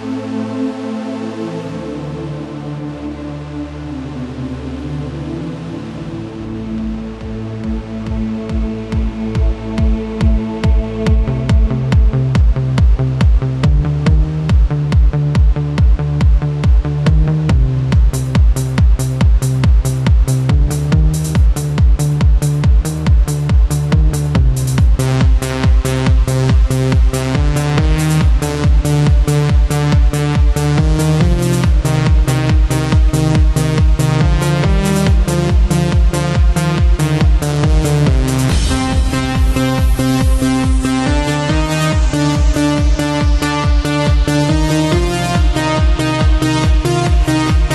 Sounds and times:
Techno: 0.0s - 47.7s.

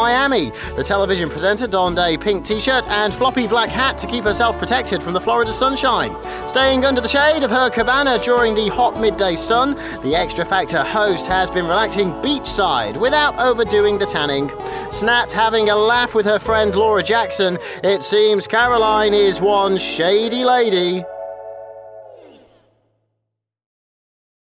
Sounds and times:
Speech: 0.0s - 21.0s
Music: 0.0s - 22.8s.

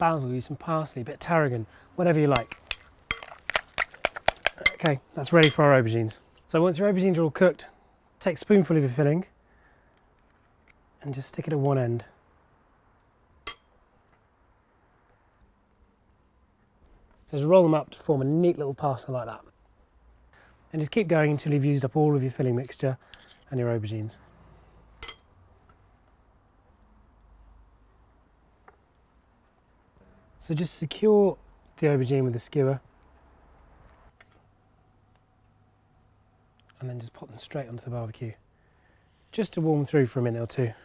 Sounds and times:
Speech: 0.0s - 2.5s, 4.6s - 9.3s, 11.0s - 12.2s, 17.3s - 19.5s, 20.7s - 24.2s, 30.4s - 32.8s, 36.7s - 38.4s, 39.3s - 40.8s.

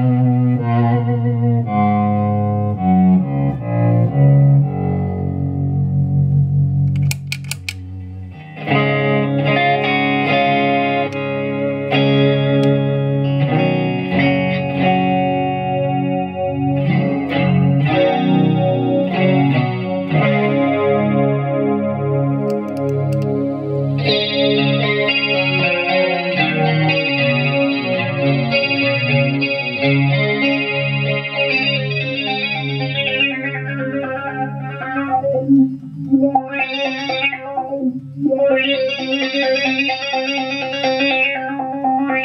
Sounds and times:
Distortion: 0.0s - 42.2s
Effects unit: 0.0s - 42.2s
Guitar: 0.0s - 42.2s.

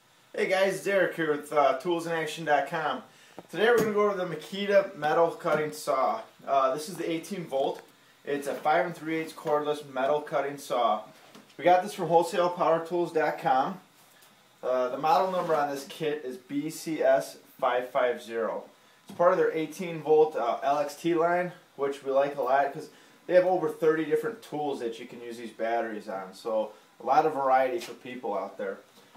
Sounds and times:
Speech: 0.3s - 13.9s, 14.6s - 28.9s.

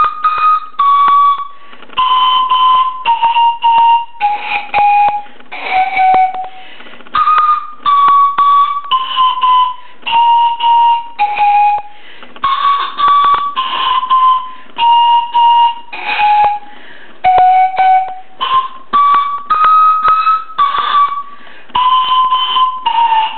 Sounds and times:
Flute: 0.0s - 23.3s
Inside, small room: 0.0s - 23.3s.

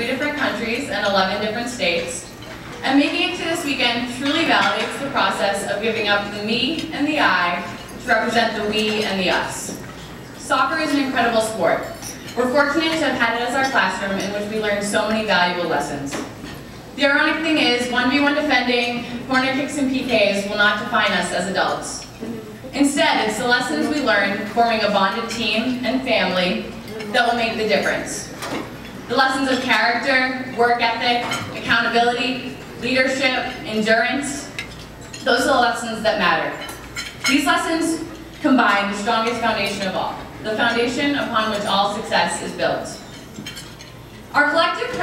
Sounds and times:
Female speech, woman speaking: 0.0s - 9.8s, 10.4s - 16.2s, 17.0s - 22.1s, 22.7s - 28.4s, 29.1s - 34.6s, 35.2s - 36.7s, 37.3s - 43.0s, 44.4s - 45.0s
Narration, monologue: 0.0s - 45.0s.

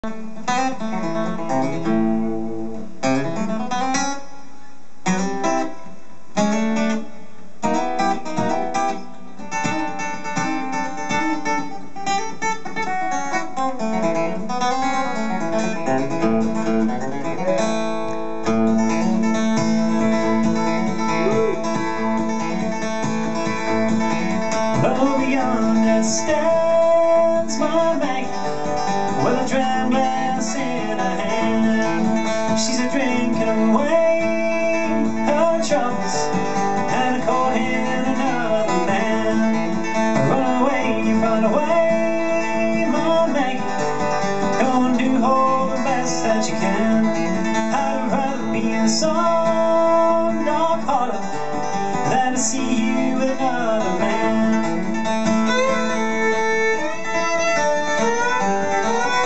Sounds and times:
Bluegrass: 0.0s - 59.2s.

